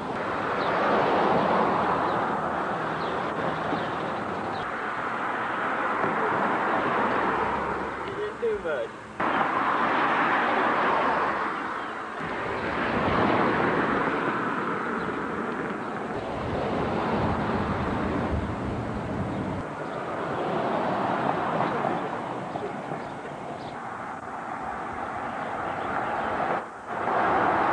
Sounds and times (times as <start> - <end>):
Car: 0.0 - 27.7.